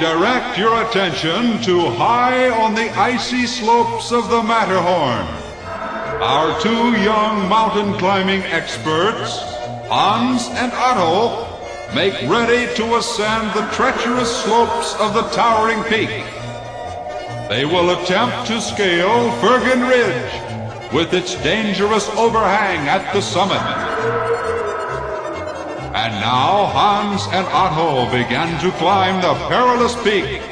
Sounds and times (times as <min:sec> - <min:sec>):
Speech: 0:00.0 - 0:05.4, 0:06.2 - 0:16.3, 0:17.5 - 0:24.0, 0:26.0 - 0:30.5
Music: 0:00.0 - 0:30.5.